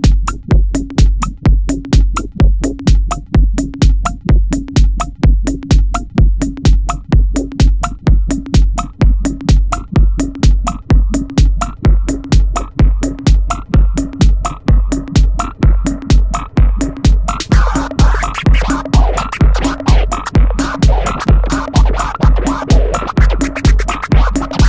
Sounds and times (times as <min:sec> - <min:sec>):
Music: 0:00.0 - 0:24.6.